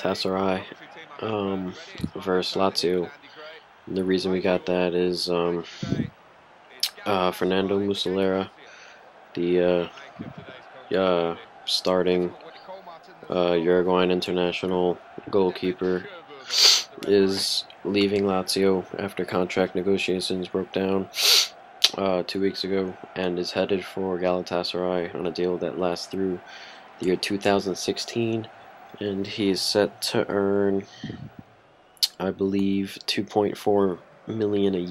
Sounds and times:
Speech: 0.0s - 6.1s, 6.8s - 8.8s, 9.4s - 21.2s, 21.8s - 31.3s, 32.0s - 34.9s.

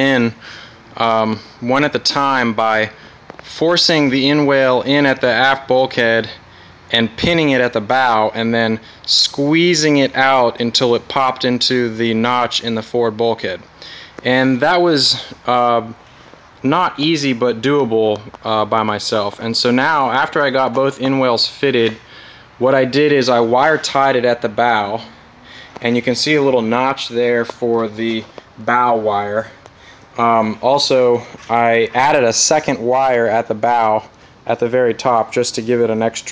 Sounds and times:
Speech: 0.0s - 0.4s, 1.0s - 13.6s, 14.2s - 16.0s, 16.6s - 22.0s, 22.6s - 25.1s, 25.8s - 29.6s, 30.2s - 36.3s.

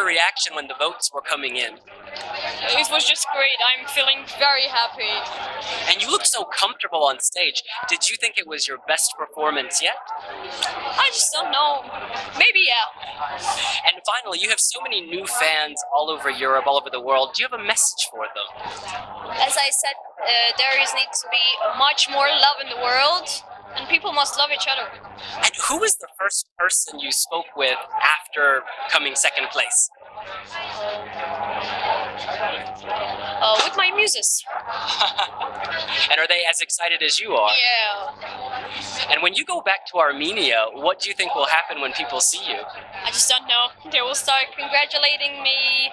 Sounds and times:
Speech: 0.0s - 45.9s.

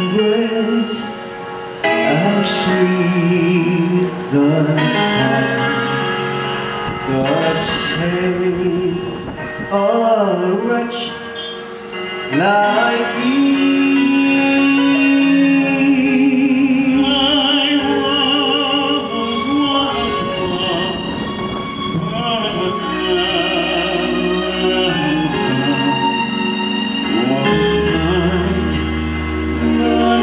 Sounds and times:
Male singing: 0.0s - 1.2s, 1.9s - 6.2s, 7.1s - 11.6s, 12.3s - 26.4s, 27.0s - 28.9s, 29.6s - 30.2s
Music: 0.0s - 30.2s.

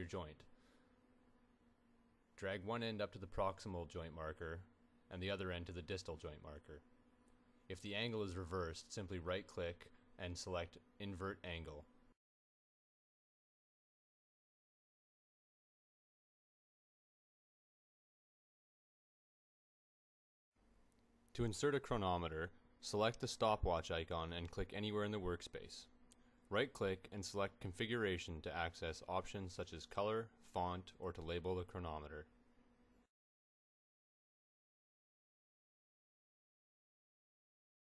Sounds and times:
Speech: 0.0s - 0.5s, 2.4s - 6.9s, 7.7s - 11.9s, 21.3s - 25.9s, 26.5s - 32.4s.

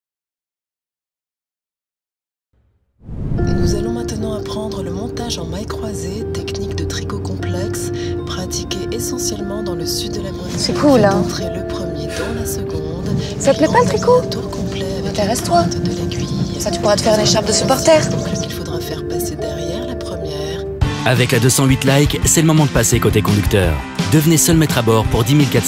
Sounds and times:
Music: 3.4s - 25.6s
Speech: 3.7s - 25.6s.

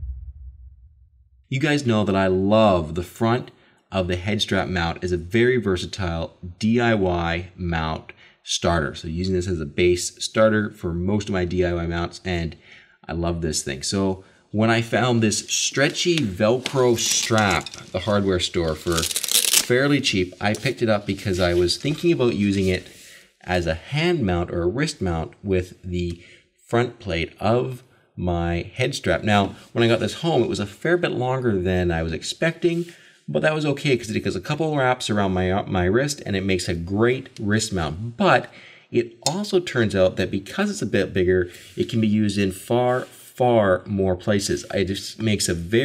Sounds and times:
Speech: 1.5s - 45.8s.

